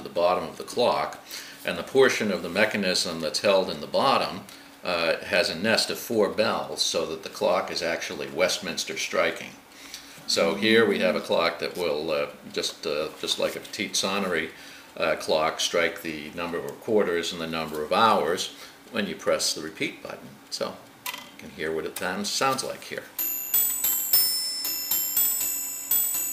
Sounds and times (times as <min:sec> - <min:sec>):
Speech: 0:00.0 - 0:09.6, 0:10.3 - 0:23.1.